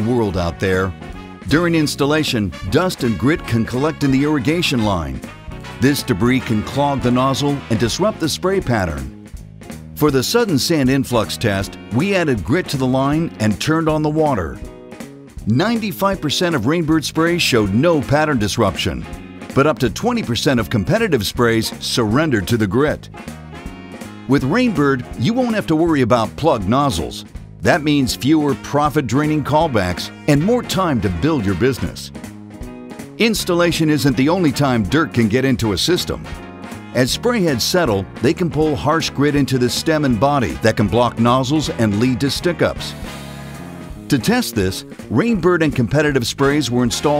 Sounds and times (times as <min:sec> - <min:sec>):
Speech: 0:00.0 - 0:05.2, 0:05.8 - 0:09.1, 0:10.0 - 0:14.6, 0:15.4 - 0:23.1, 0:24.3 - 0:32.1, 0:33.2 - 0:36.3, 0:37.0 - 0:43.0, 0:44.1 - 0:47.1
Music: 0:00.0 - 0:47.1.